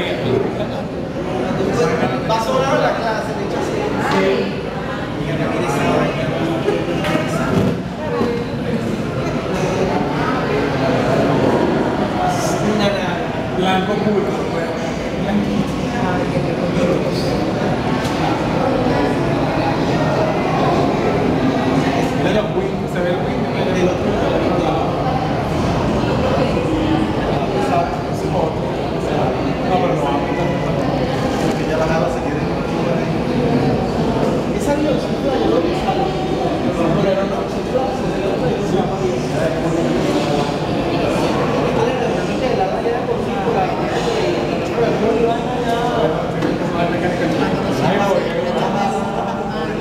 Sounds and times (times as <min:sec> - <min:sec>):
Speech: 0:00.0 - 0:49.8.